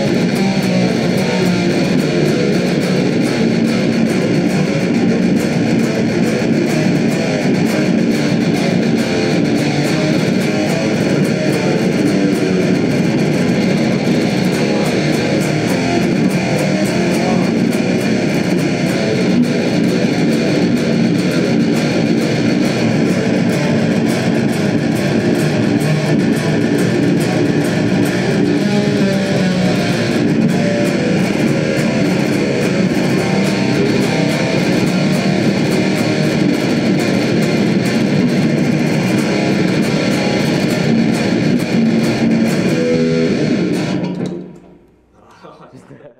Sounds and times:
Heavy metal: 0:00.0 - 0:44.7
Guitar: 0:00.0 - 0:46.1.

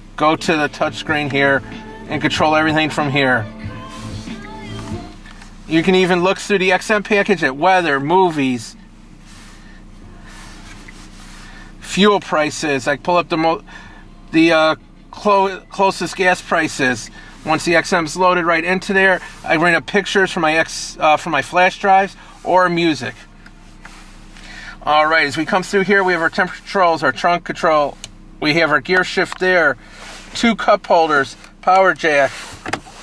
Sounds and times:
Speech: 0:00.2 - 0:03.4, 0:05.7 - 0:08.8, 0:11.8 - 0:13.6, 0:14.4 - 0:23.2, 0:24.8 - 0:29.8, 0:30.4 - 0:32.4.

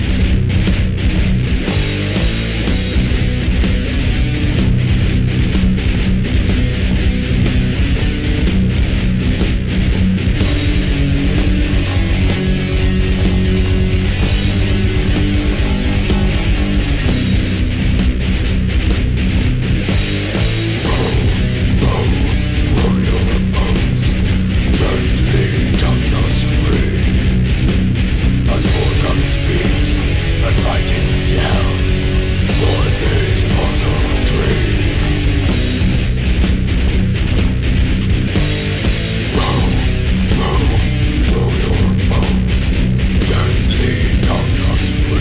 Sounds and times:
Music: 0:00.0 - 0:45.2.

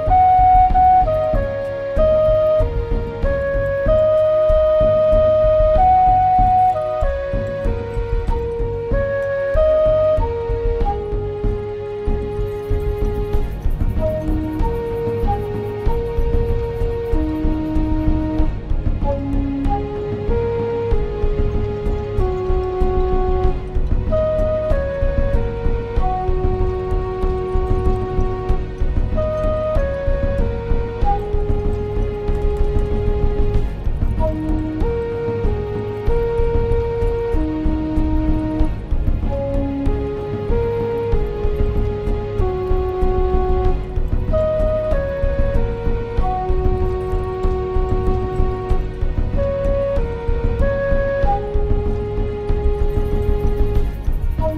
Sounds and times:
Flute: 0:00.0 - 0:54.5.

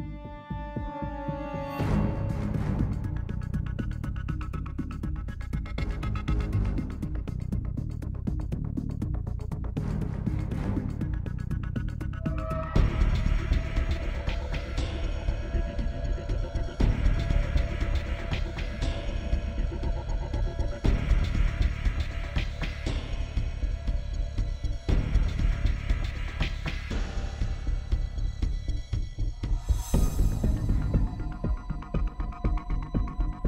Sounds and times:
Music: 0:00.0 - 0:33.4.

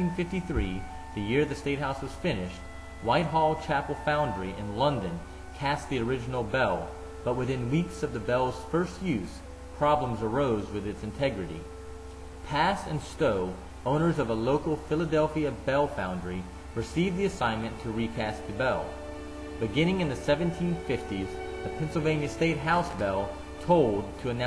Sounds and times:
Speech: 0:00.0 - 0:11.7, 0:12.5 - 0:19.0, 0:19.6 - 0:24.4
Music: 0:00.0 - 0:24.4.

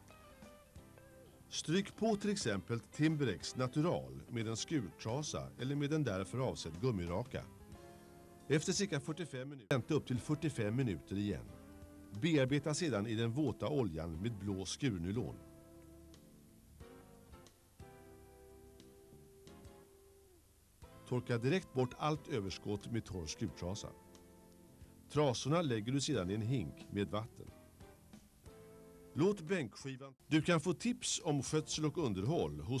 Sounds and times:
Music: 0:00.0 - 0:32.8
Speech: 0:01.5 - 0:07.5, 0:08.5 - 0:11.5, 0:12.2 - 0:15.4, 0:21.1 - 0:24.0, 0:25.1 - 0:27.6, 0:29.2 - 0:32.8.

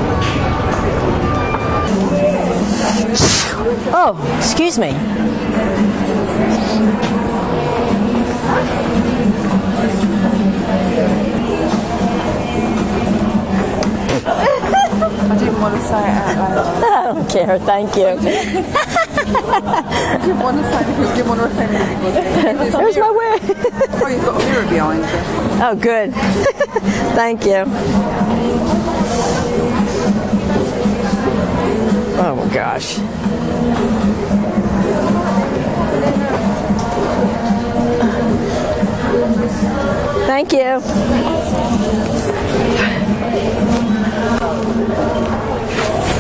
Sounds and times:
Inside, public space: 0:00.0 - 0:46.2
Music: 0:00.2 - 0:46.2.

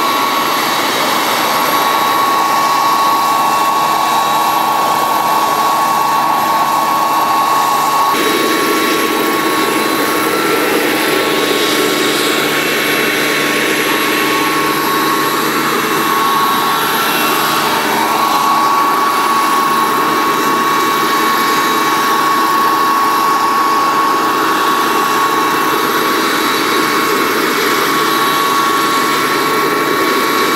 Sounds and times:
Helicopter: 0:00.0 - 0:30.5.

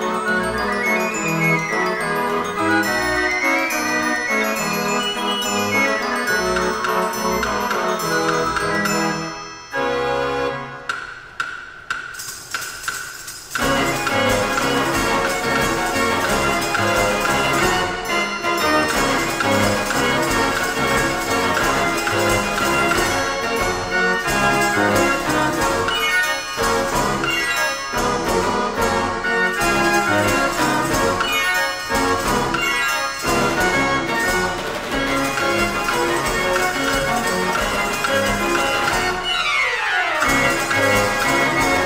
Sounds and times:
Jingle bell: 0:00.0 - 0:10.7, 0:13.3 - 0:39.4, 0:40.2 - 0:41.8
Organ: 0:00.0 - 0:10.8, 0:13.5 - 0:41.8.

